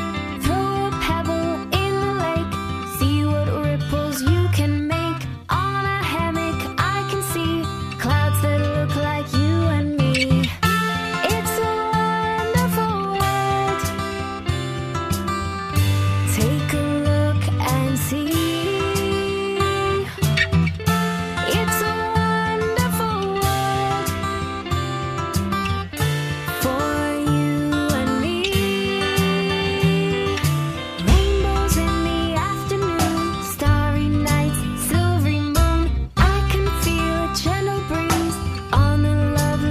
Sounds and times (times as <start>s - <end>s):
Music: 0.0s - 39.7s.